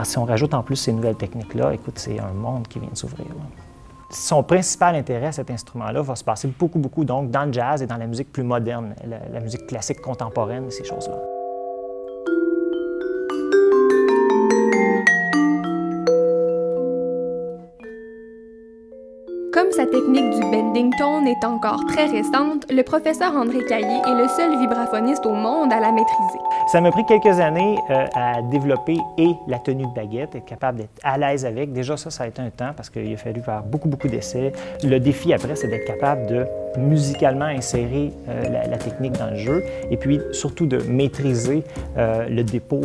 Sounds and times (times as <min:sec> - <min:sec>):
Speech: 0:00.0 - 0:03.5, 0:19.6 - 0:42.8
Vibraphone: 0:00.8 - 0:05.9, 0:09.4 - 0:30.7, 0:33.2 - 0:42.8.